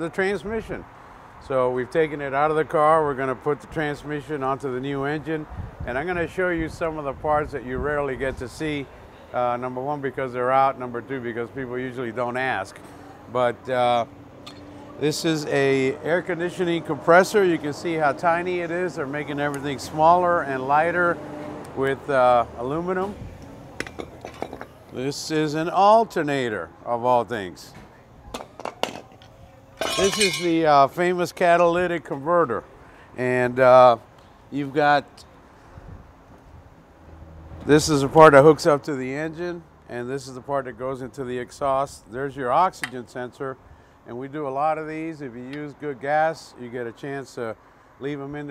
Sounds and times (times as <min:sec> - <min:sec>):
Speech: 0:00.0 - 0:00.8, 0:01.4 - 0:14.1, 0:15.0 - 0:21.2, 0:21.8 - 0:23.2, 0:24.9 - 0:28.1, 0:29.8 - 0:32.6, 0:33.2 - 0:35.2, 0:37.7 - 0:48.5.